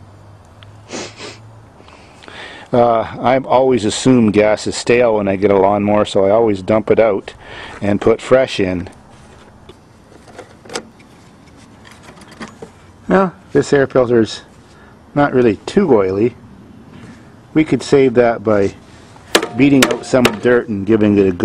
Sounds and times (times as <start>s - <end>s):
Speech: 2.7s - 9.0s, 13.1s - 14.5s, 15.2s - 16.4s, 17.5s - 18.8s, 19.5s - 21.4s.